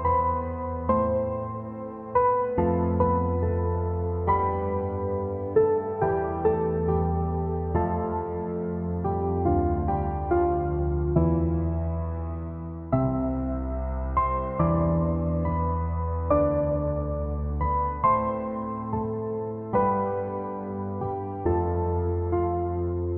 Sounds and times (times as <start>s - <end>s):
Music: 0.0s - 23.1s.